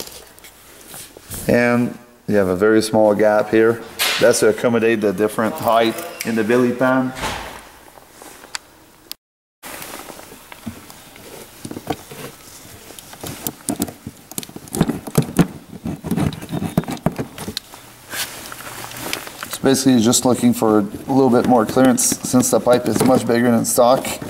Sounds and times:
Speech: 1.5s - 7.2s, 19.6s - 24.3s.

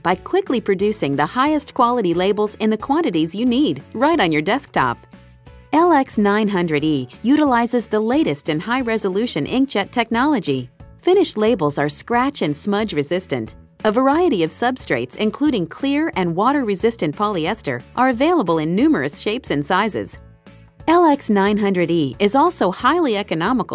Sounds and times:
Speech: 0.0s - 5.0s, 5.8s - 20.2s, 20.9s - 23.7s
Music: 0.0s - 23.7s.

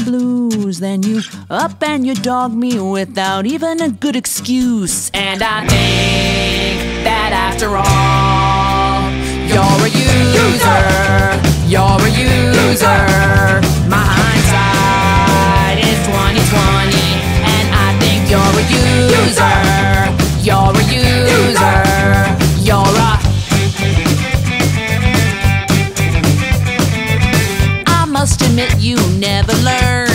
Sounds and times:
Exciting music: 5.7s - 27.9s.

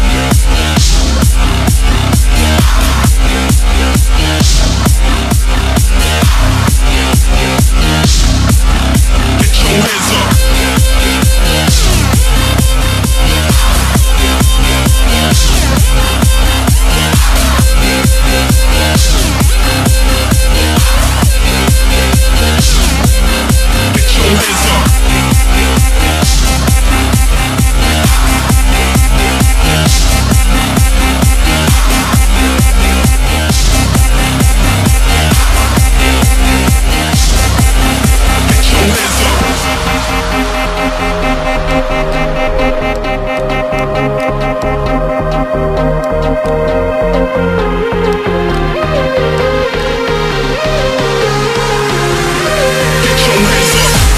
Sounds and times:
Electronic dance music: 0.0s - 54.1s.

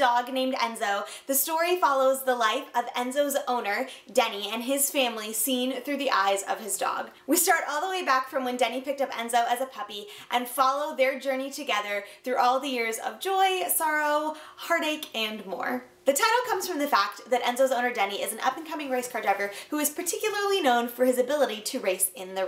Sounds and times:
Speech: 0.0s - 22.4s.

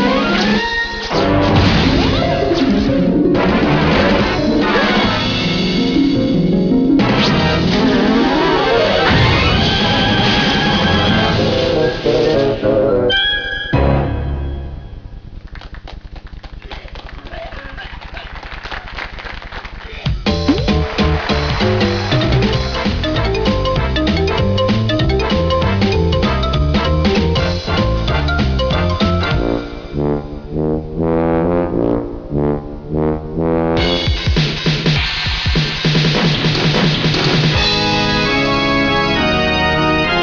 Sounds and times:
Trombone: 1.2s - 6.2s, 7.0s - 13.2s, 20.7s - 34.4s.

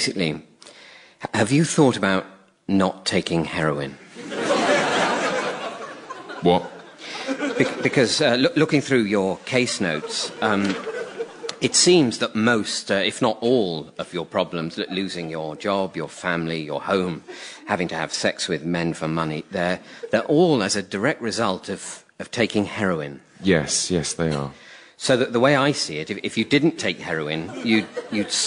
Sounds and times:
Speech: 0.0s - 0.5s, 1.2s - 4.0s, 6.4s - 6.8s, 7.6s - 10.8s, 11.5s - 28.4s.

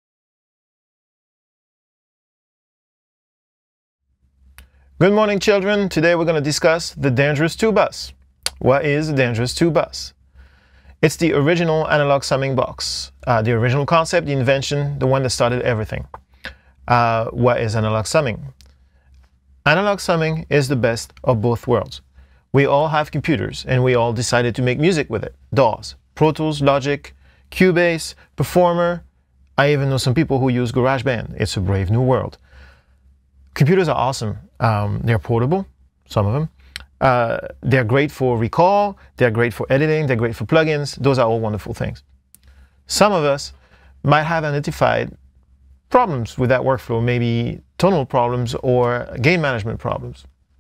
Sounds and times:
Speech: 5.0s - 10.2s, 11.0s - 16.2s, 16.9s - 18.6s, 19.7s - 22.0s, 22.6s - 32.4s, 33.6s - 42.0s, 42.9s - 45.2s, 45.9s - 50.3s.

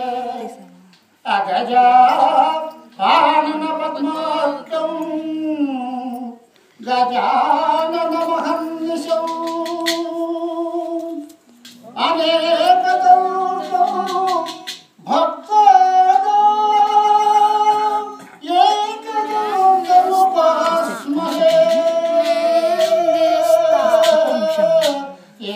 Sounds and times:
Singing: 0.0s - 25.5s
Vocal music: 0.0s - 25.5s.

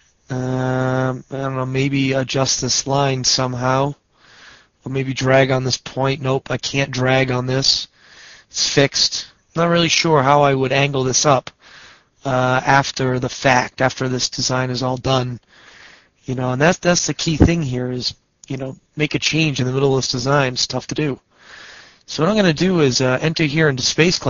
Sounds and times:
Speech: 0.3s - 4.0s, 4.8s - 7.9s, 8.5s - 11.6s, 12.2s - 15.4s, 16.3s - 21.2s, 22.1s - 24.2s.

